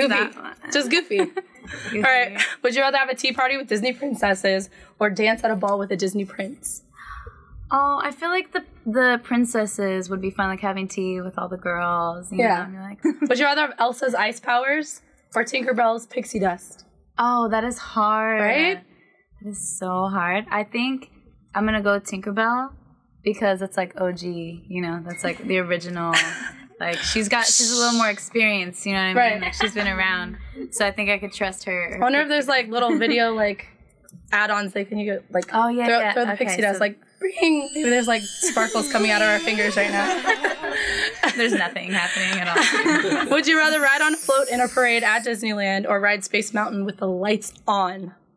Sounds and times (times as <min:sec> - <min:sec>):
Narration, monologue: 0:00.0 - 0:48.3.